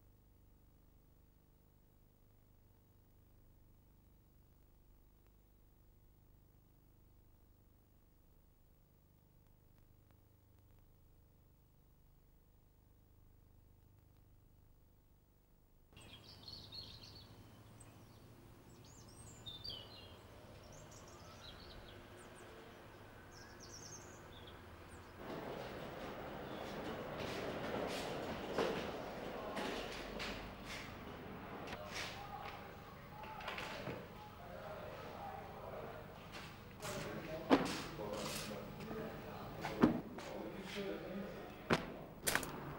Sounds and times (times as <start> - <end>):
Speech: 28.9 - 30.4, 31.7 - 42.0.